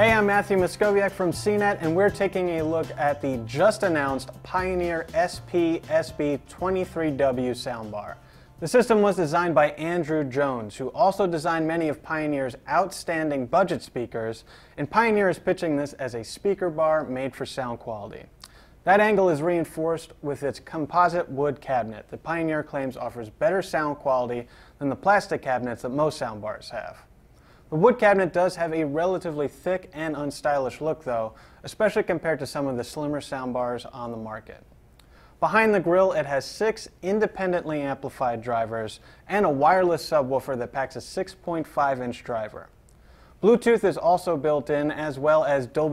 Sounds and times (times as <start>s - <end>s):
Speech: 0.0s - 27.1s, 27.7s - 34.7s, 35.4s - 42.8s, 43.4s - 45.9s.